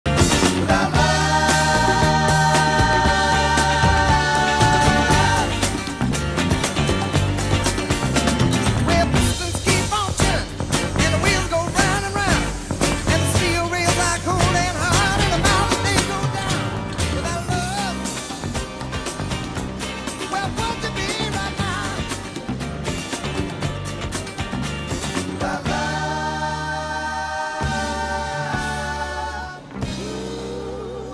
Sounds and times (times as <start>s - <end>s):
Music: 0.0s - 31.1s.